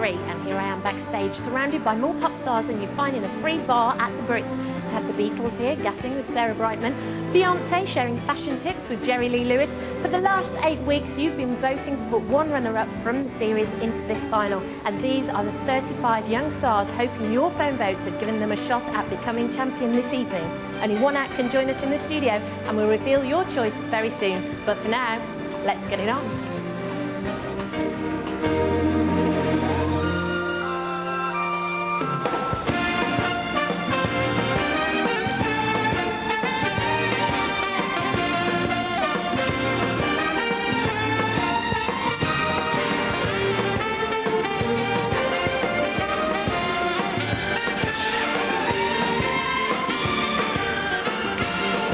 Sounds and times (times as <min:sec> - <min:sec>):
Speech: 0:00.0 - 0:26.4
Music: 0:00.0 - 0:51.9.